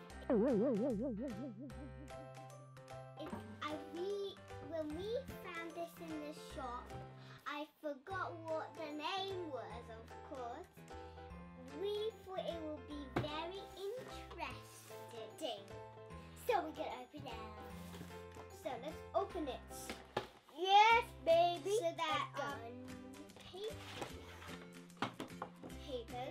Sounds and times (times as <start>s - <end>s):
Music: 0.0s - 26.3s
Speech: 3.2s - 10.7s, 11.6s - 15.6s, 16.4s - 17.6s, 18.5s - 19.9s, 20.6s - 23.9s, 25.8s - 26.3s.